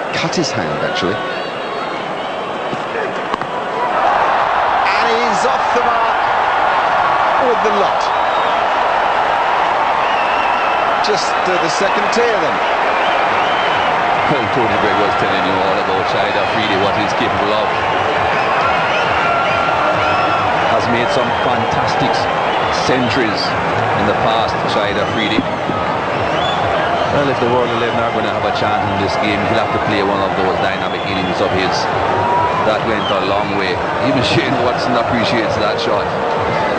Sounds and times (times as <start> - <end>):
Speech: 0.0 - 1.2, 4.9 - 6.2, 11.0 - 12.6, 14.3 - 17.7, 20.7 - 25.4, 27.1 - 31.9, 32.6 - 36.1.